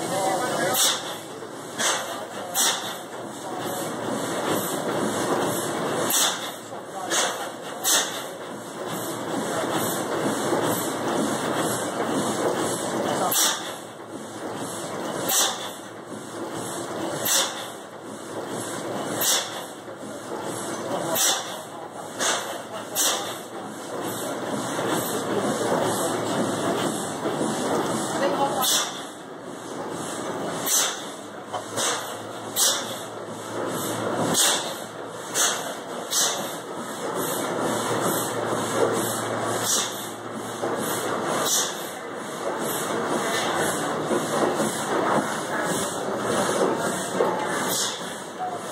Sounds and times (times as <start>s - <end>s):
Speech: 0.0s - 1.2s, 1.8s - 4.2s, 6.7s - 7.9s, 13.0s - 13.6s, 20.2s - 23.4s, 25.0s - 26.8s, 28.0s - 29.0s, 45.2s - 48.7s
Heavy engine (low frequency): 0.0s - 48.7s.